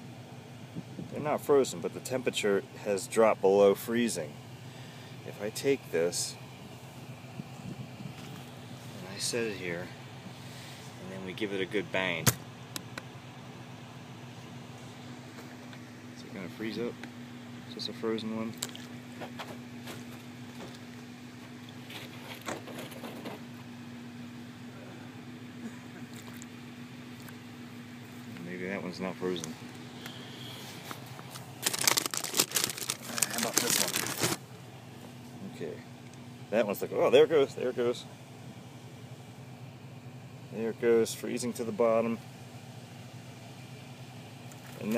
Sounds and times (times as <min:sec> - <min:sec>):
Speech: 0:01.1 - 0:04.4, 0:05.2 - 0:06.4, 0:09.0 - 0:10.0, 0:11.0 - 0:12.3, 0:16.2 - 0:17.0, 0:17.7 - 0:18.6, 0:28.3 - 0:29.6, 0:33.1 - 0:34.2, 0:35.4 - 0:35.9, 0:36.5 - 0:38.1, 0:40.5 - 0:42.2, 0:44.8 - 0:44.9.